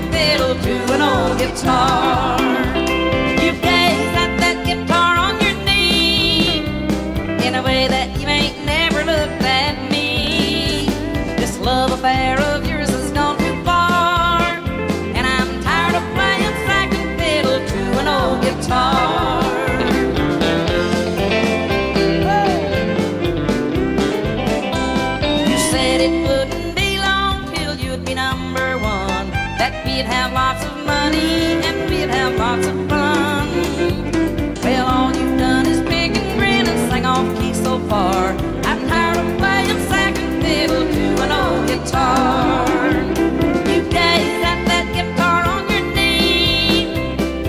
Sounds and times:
Musical instrument: 18.7 - 27.3, 28.6 - 47.4.

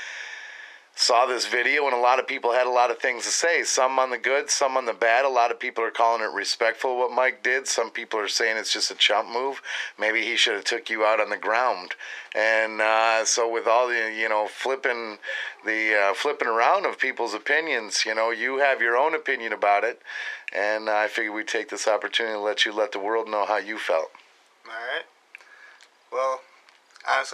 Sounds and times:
Speech: 1.0 - 25.1, 26.2 - 27.3.

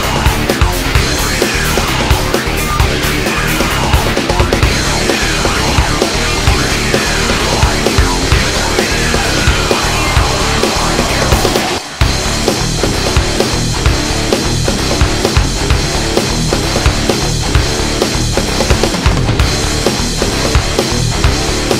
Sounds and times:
Techno: 0.0 - 21.7.

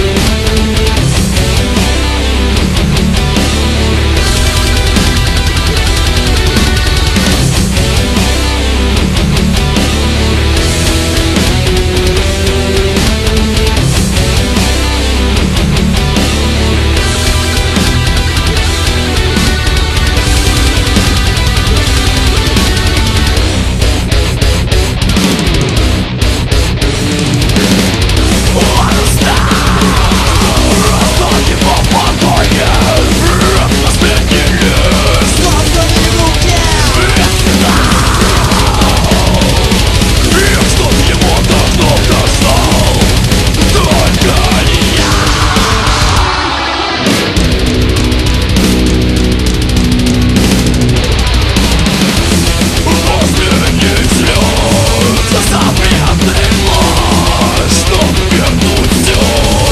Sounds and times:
Music: 0.0 - 59.7.

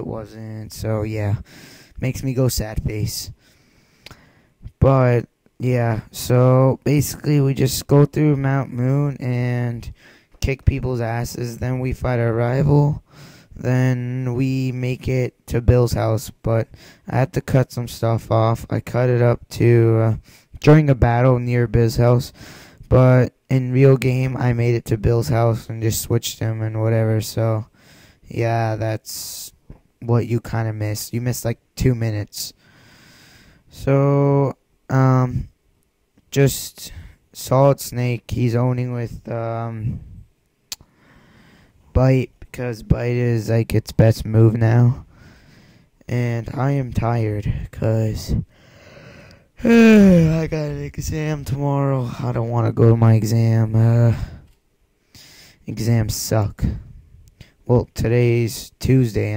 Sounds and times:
Speech: 0.0 - 3.4, 4.6 - 13.0, 13.6 - 32.6, 33.7 - 35.5, 36.3 - 40.1, 41.9 - 45.1, 46.1 - 48.5, 49.6 - 54.4, 55.7 - 56.8, 57.6 - 59.3.

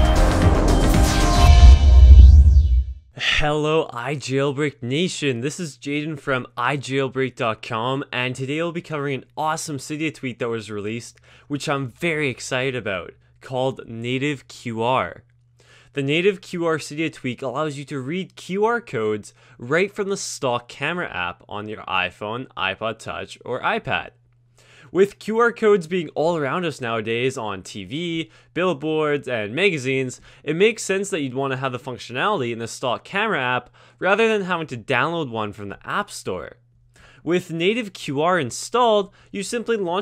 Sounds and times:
Speech: 3.2 - 15.2, 16.0 - 24.2, 24.9 - 36.6, 37.3 - 40.0.

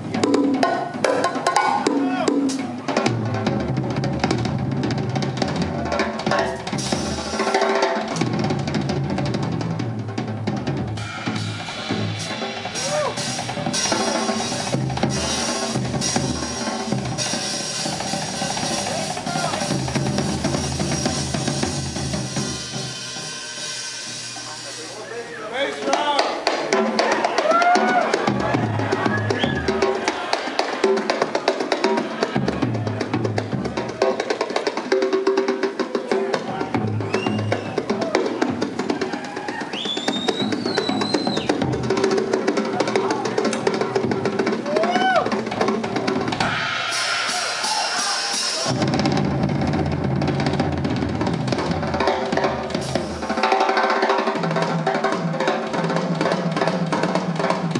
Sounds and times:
Bass drum: 0.0 - 22.9, 48.6 - 53.4
Drum kit: 0.0 - 57.7
Speech: 24.4 - 26.4.

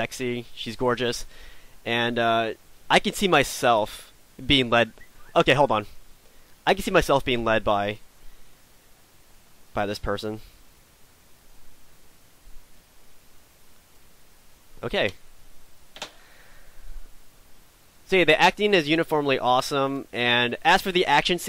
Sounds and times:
Speech: 0.0 - 1.3, 1.9 - 5.9, 6.7 - 8.0, 9.8 - 10.4, 14.8 - 15.2, 18.1 - 21.4.

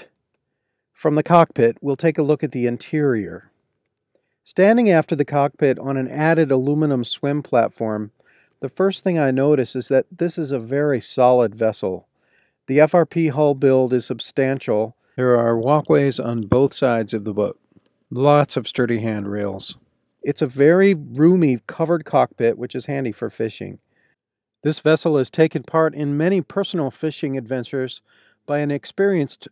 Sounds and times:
Speech: 1.0 - 3.4, 4.5 - 12.0, 12.7 - 23.8, 24.6 - 29.5.

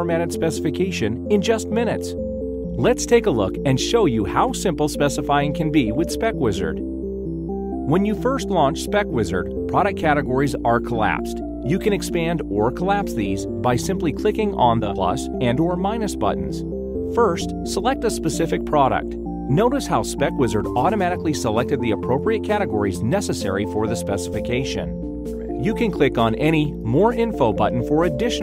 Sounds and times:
Speech: 0.0 - 2.2, 2.8 - 6.8, 7.9 - 16.6, 17.2 - 24.9, 25.6 - 28.4
Music: 0.0 - 28.4.

